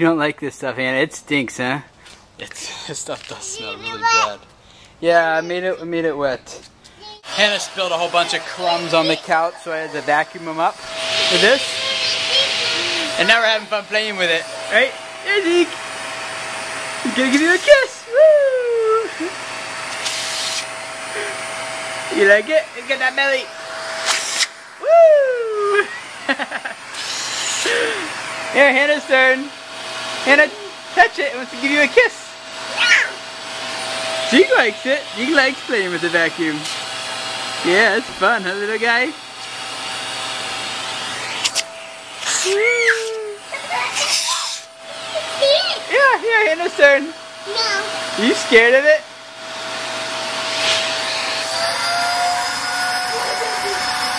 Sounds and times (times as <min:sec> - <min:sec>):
Child speech, kid speaking: 0:03.3 - 0:04.5, 0:05.1 - 0:06.0, 0:07.0 - 0:07.3, 0:08.2 - 0:10.0, 0:11.3 - 0:13.3, 0:32.7 - 0:33.2, 0:42.6 - 0:46.2, 0:47.4 - 0:48.0
Vacuum cleaner: 0:05.0 - 0:54.1.